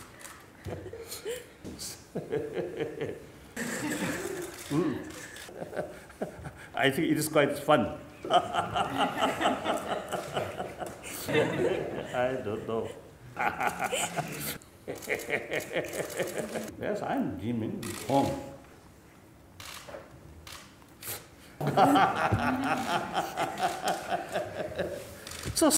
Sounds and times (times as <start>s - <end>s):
Giggle: 0.6s - 6.6s, 8.2s - 16.7s, 21.6s - 25.1s.